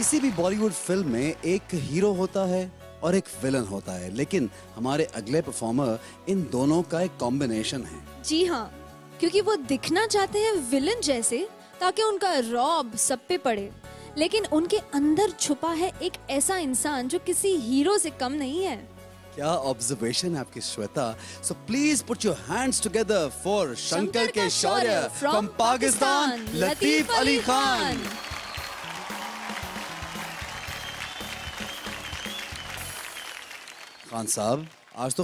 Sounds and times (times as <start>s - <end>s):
Music: 0.0s - 35.2s.